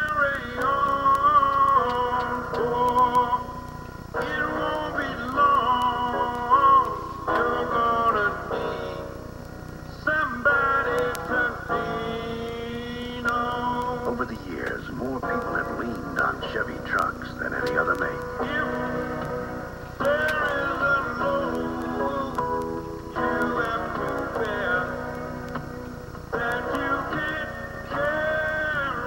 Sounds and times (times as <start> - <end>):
Music: 0.0 - 29.0.